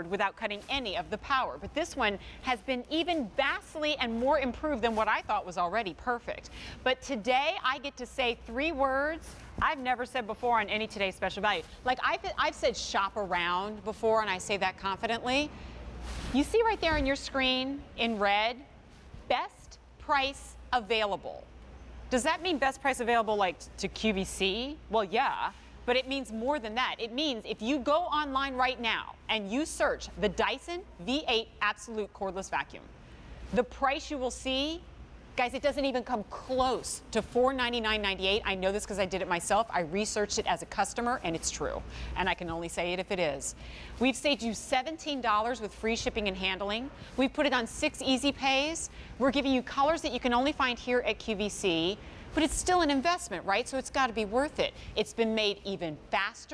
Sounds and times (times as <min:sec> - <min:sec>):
Speech: 0:00.0 - 0:15.5, 0:16.3 - 0:18.7, 0:19.3 - 0:21.4, 0:22.1 - 0:32.9, 0:33.5 - 0:56.5.